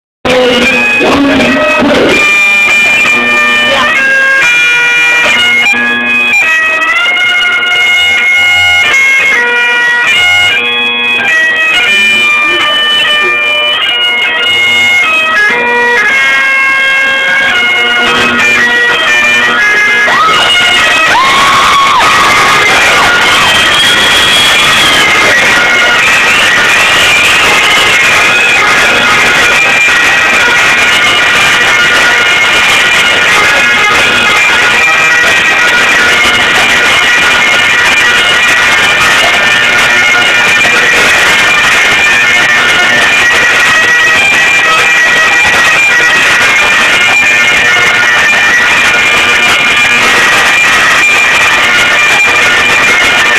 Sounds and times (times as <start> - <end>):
Bagpipes: 0.3 - 53.3
Wind instrument, woodwind instrument: 0.3 - 53.3.